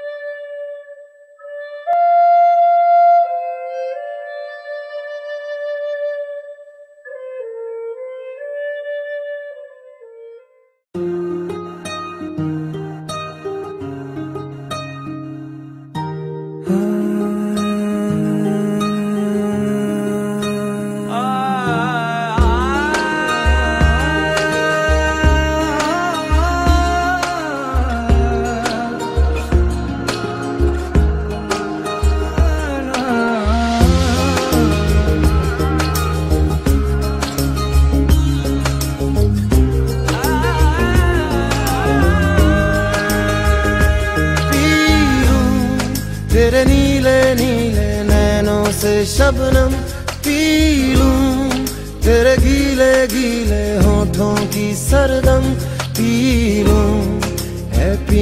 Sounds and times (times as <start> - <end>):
Flute: 0.0 - 14.0, 21.5 - 38.4.